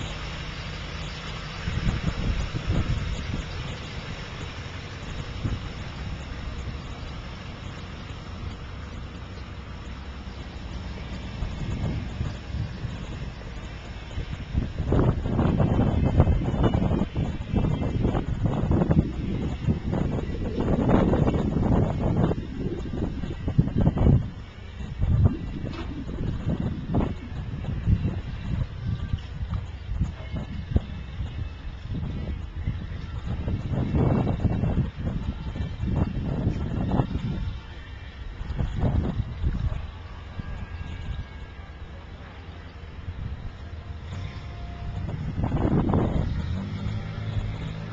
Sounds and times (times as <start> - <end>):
Vehicle: 0.0 - 47.9.